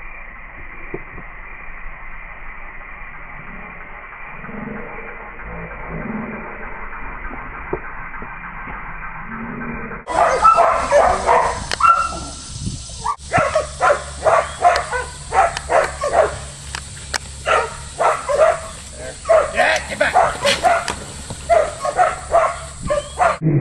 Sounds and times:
Dog: 10.1 - 12.3, 13.0 - 16.5, 17.5 - 23.4
Speech: 19.0 - 20.2.

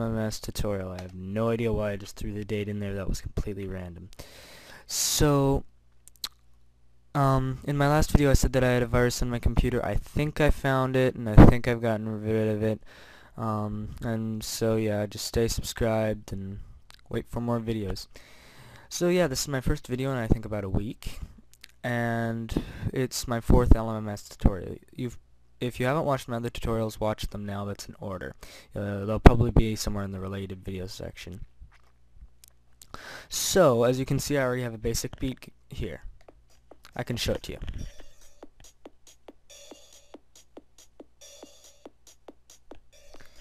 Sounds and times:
Speech: 0.0 - 4.2, 4.8 - 6.4, 7.2 - 12.8, 13.4 - 18.1, 18.9 - 31.5, 33.3 - 36.1, 36.9 - 37.9.

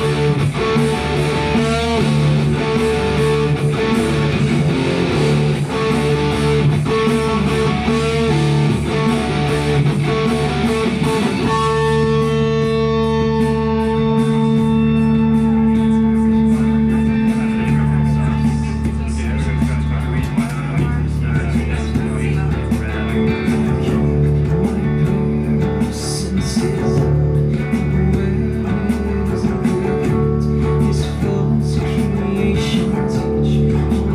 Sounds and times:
Electric guitar: 0.0 - 34.1
Strum: 0.0 - 34.1.

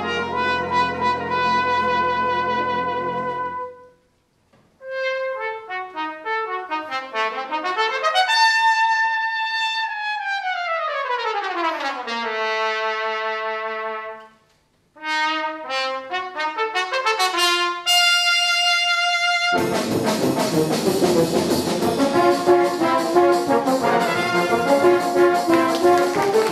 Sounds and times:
Trumpet: 0.0 - 4.1, 4.8 - 26.5.

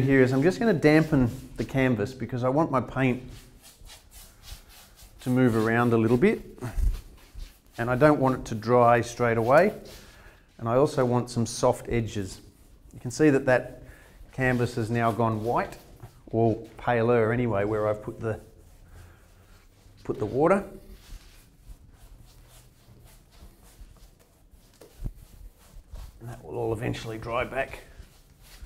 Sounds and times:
Speech: 0.0 - 3.3, 5.2 - 6.5, 7.8 - 9.9, 10.6 - 12.4, 13.0 - 13.8, 14.4 - 18.5, 20.0 - 20.8, 26.2 - 27.9.

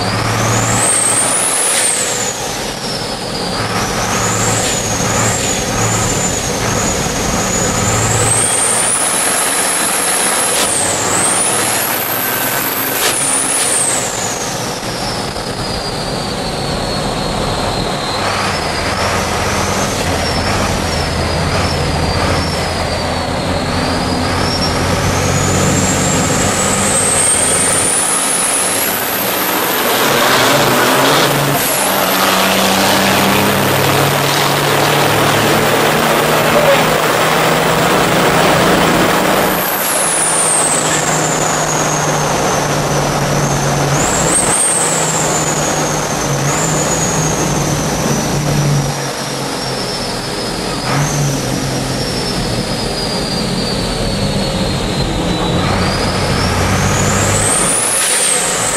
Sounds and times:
Truck: 0.0 - 58.7.

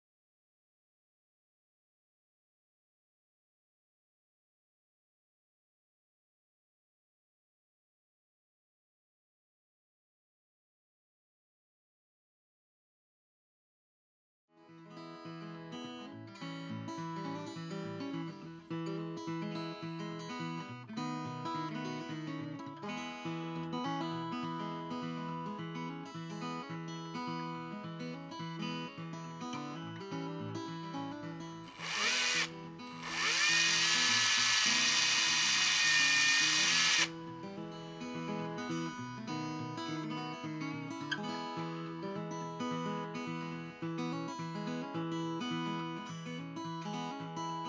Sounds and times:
Music: 14.5 - 47.6.

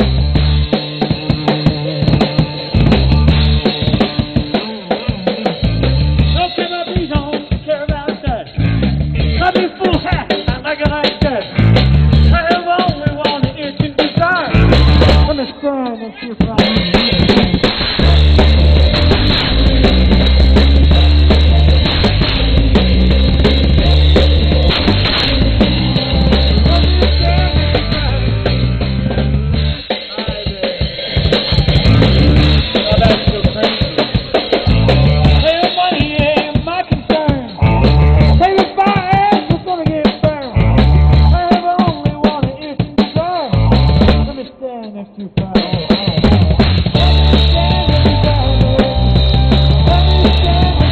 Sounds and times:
Music: 0.0 - 50.9.

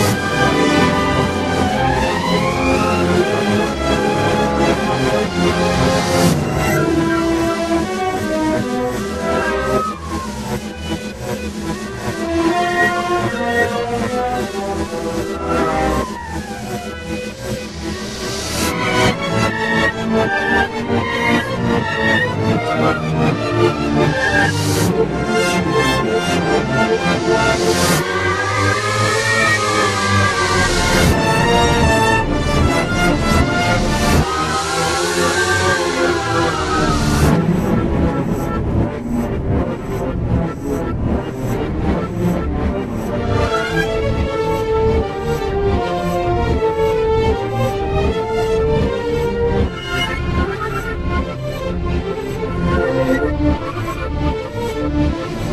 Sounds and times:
Soundtrack music: 0.0 - 55.5.

